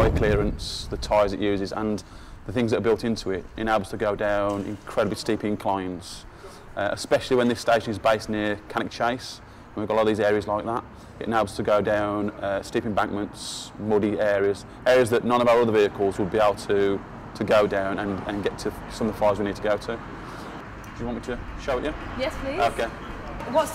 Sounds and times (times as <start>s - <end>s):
Speech: 0.0s - 20.0s.